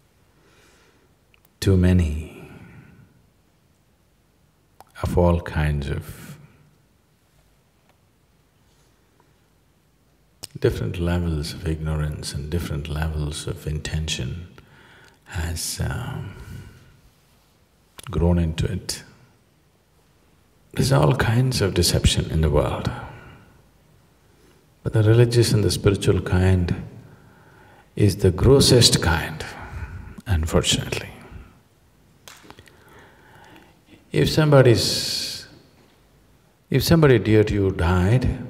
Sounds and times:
Speech: 0:01.6 - 0:02.9, 0:04.9 - 0:06.5, 0:10.4 - 0:14.6, 0:15.3 - 0:16.8, 0:18.0 - 0:19.2, 0:20.8 - 0:23.4, 0:24.8 - 0:27.0, 0:28.0 - 0:31.6, 0:34.1 - 0:35.6, 0:36.7 - 0:38.5.

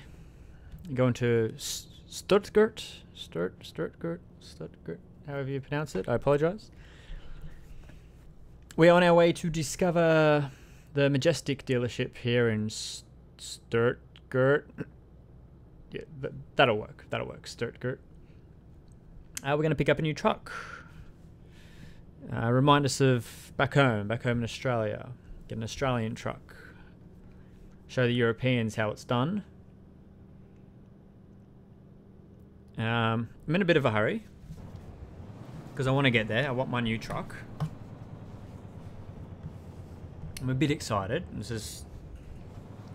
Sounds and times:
Vehicle: 0:00.0 - 0:42.9
Speech: 0:00.8 - 0:06.7, 0:08.7 - 0:15.0, 0:15.9 - 0:18.0, 0:19.4 - 0:20.9, 0:22.2 - 0:26.8, 0:27.9 - 0:29.5, 0:32.7 - 0:34.3, 0:35.8 - 0:37.7, 0:40.4 - 0:42.0.

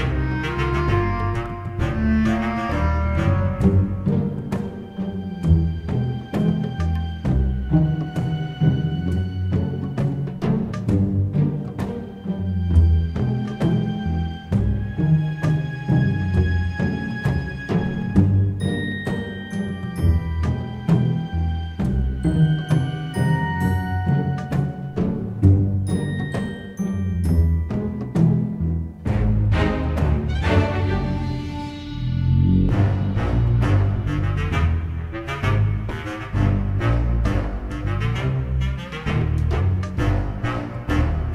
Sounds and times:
Soundtrack music: 0:00.0 - 0:41.3.

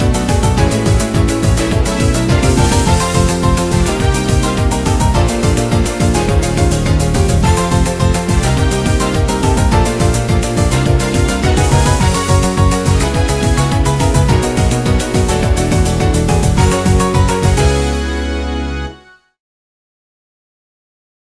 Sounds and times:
Music: 0:00.0 - 0:19.4.

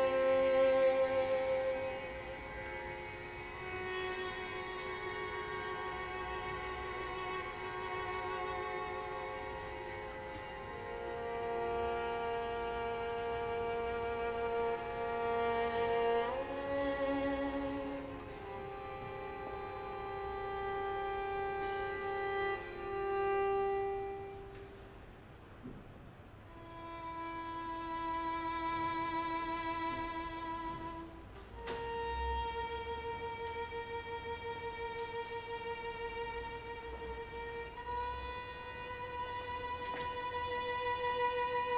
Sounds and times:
Violin, fiddle: 0:00.0 - 0:25.8, 0:26.5 - 0:41.7.

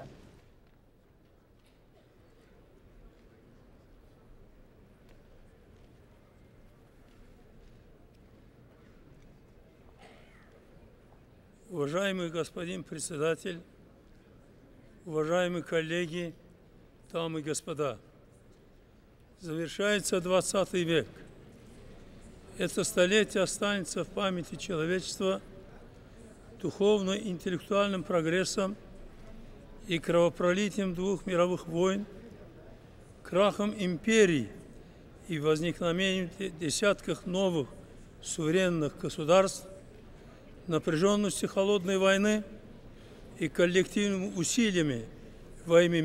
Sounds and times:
Narration, monologue: 0:00.0 - 0:00.8, 0:09.9 - 0:46.0
Male speech, man speaking: 0:11.7 - 0:13.7, 0:15.0 - 0:16.4, 0:17.1 - 0:18.0, 0:19.4 - 0:21.2, 0:22.5 - 0:25.5, 0:26.6 - 0:28.8, 0:29.8 - 0:32.4, 0:33.2 - 0:34.6, 0:35.2 - 0:39.8, 0:40.6 - 0:42.6, 0:43.4 - 0:46.0.

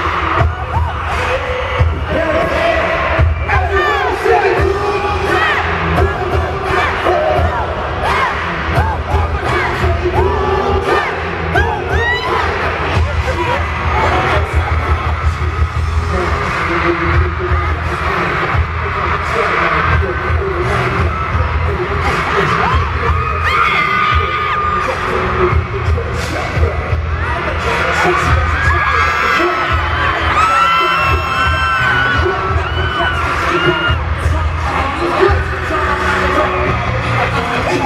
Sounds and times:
Independent music: 0:00.0 - 0:37.8
Pop music: 0:00.0 - 0:37.8.

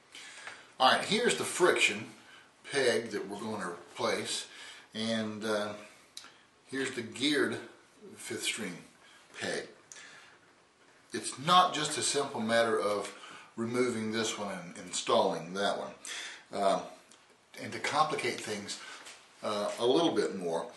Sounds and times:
Speech: 0:00.8 - 0:06.0, 0:06.7 - 0:09.8, 0:11.1 - 0:20.7.

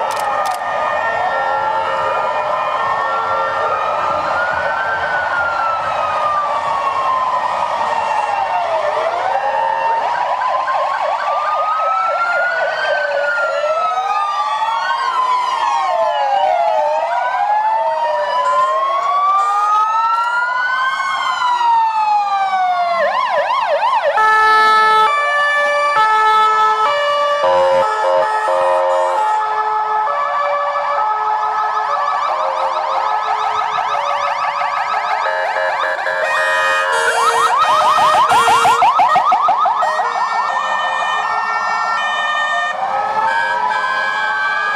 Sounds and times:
Ambulance (siren): 0:00.0 - 0:44.7.

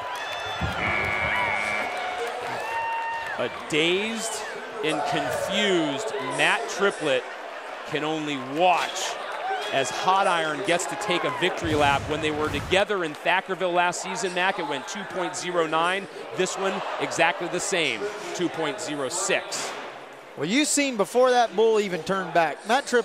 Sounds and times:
Speech: 0:03.4 - 0:07.2, 0:07.9 - 0:19.8, 0:20.4 - 0:23.0.

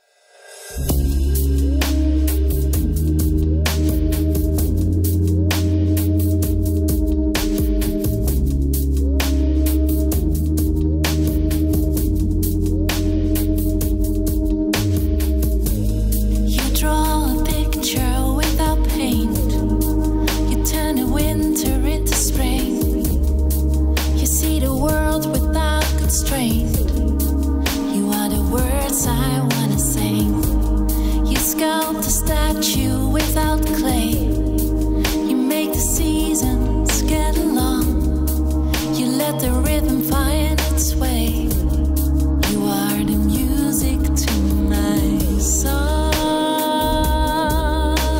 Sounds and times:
Music: 0:00.0 - 0:48.2.

